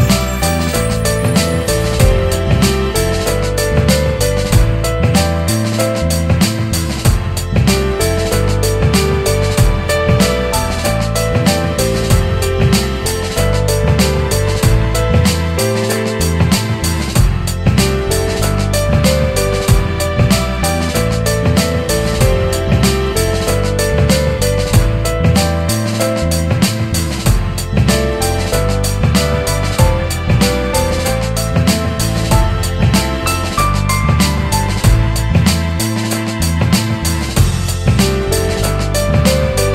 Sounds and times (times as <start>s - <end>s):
Music: 0.0s - 39.7s.